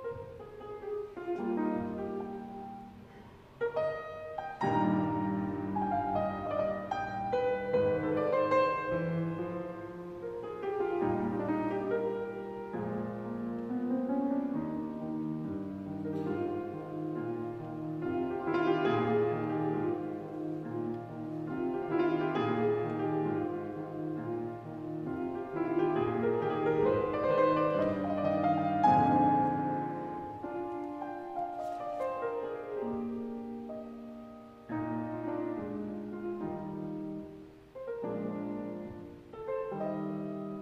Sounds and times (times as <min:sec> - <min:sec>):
Music: 0:00.0 - 0:40.6.